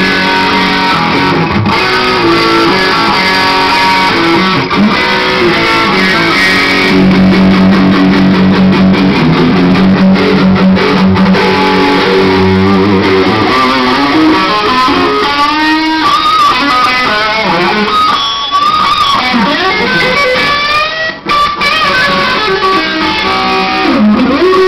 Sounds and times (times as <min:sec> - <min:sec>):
Music: 0:00.0 - 0:24.6.